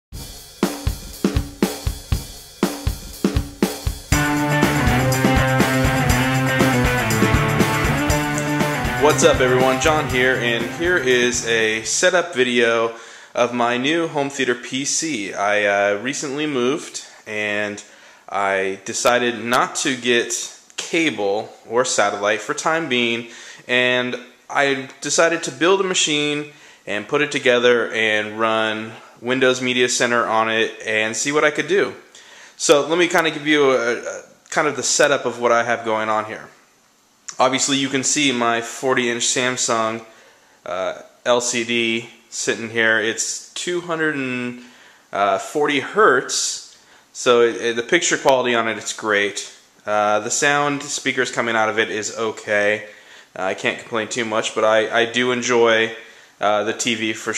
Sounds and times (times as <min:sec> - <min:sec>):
Music: 0:00.2 - 0:11.9
Speech: 0:09.0 - 0:36.6, 0:37.3 - 0:40.1, 0:40.7 - 0:57.3.